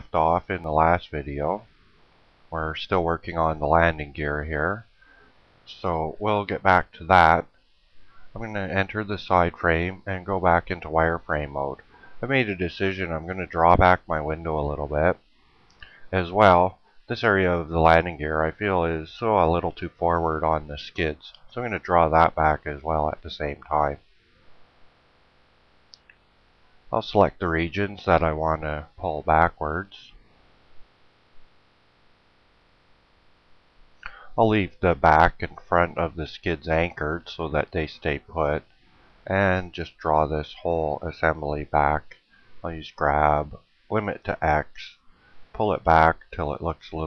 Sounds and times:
Speech: 0.0 - 1.6, 2.6 - 4.8, 5.7 - 7.5, 8.4 - 15.2, 16.1 - 24.0, 27.0 - 30.1, 34.1 - 38.6, 39.3 - 45.0, 45.6 - 47.0.

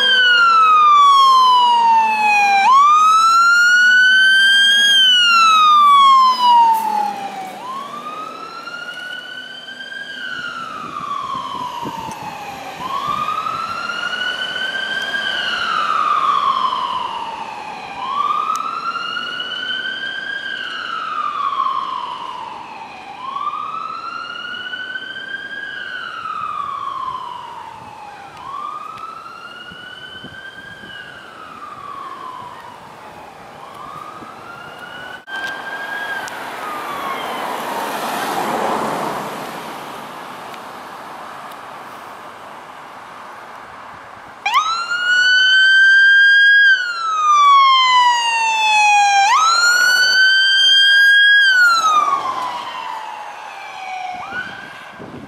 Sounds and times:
Fire engine, fire truck (siren): 0.0 - 55.2
Truck: 2.9 - 47.4.

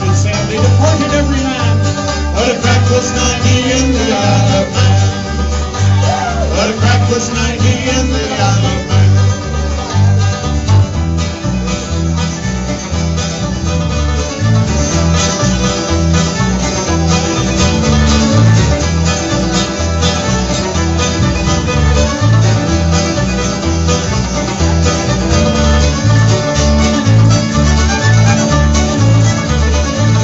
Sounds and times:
Bluegrass: 0.0 - 30.2
Singing: 2.4 - 5.2, 6.0 - 9.1.

